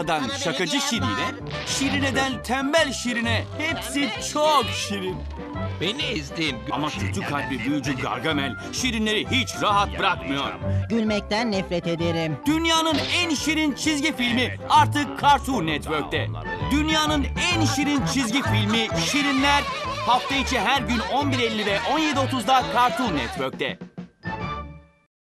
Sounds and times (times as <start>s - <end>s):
Speech: 0.0s - 5.2s, 5.8s - 23.8s
Music: 0.0s - 25.1s.